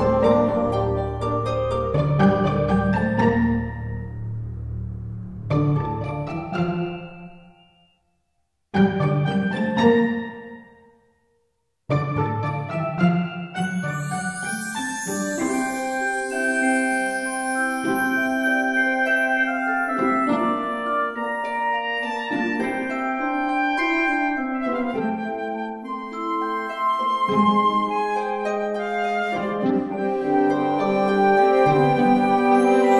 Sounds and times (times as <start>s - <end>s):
Marimba, xylophone: 0.0s - 4.0s, 12.4s - 25.1s, 25.8s - 32.9s
Glockenspiel: 0.0s - 4.4s, 5.5s - 11.3s, 11.9s - 32.9s.